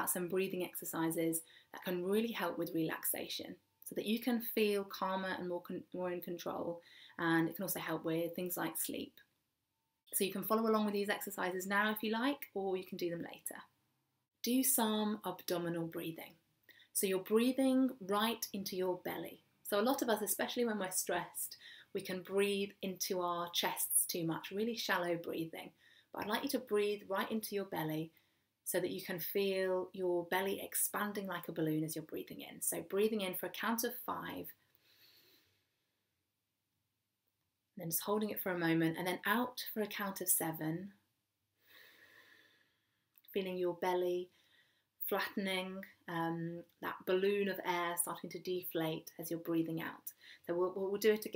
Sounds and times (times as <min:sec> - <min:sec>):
Speech: 0:00.0 - 0:09.2, 0:10.2 - 0:13.7, 0:14.5 - 0:16.3, 0:17.0 - 0:28.1, 0:28.7 - 0:34.5, 0:37.8 - 0:41.0, 0:43.3 - 0:44.3, 0:45.0 - 0:51.3.